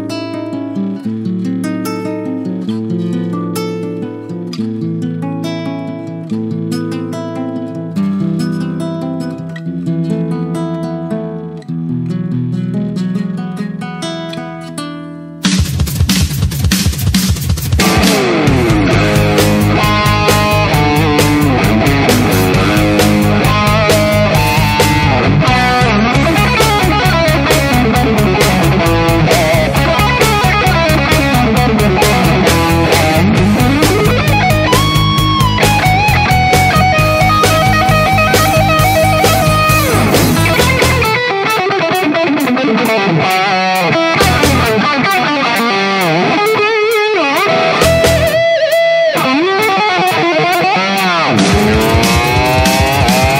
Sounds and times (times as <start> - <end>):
Strum: 11.6 - 53.4.